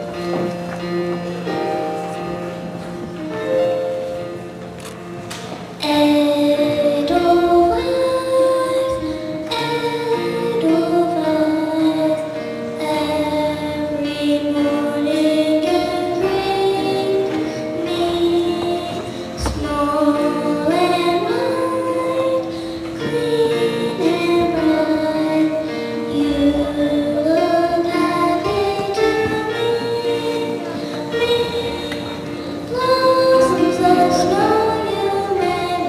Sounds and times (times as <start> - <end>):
Tender music: 0.0 - 35.8.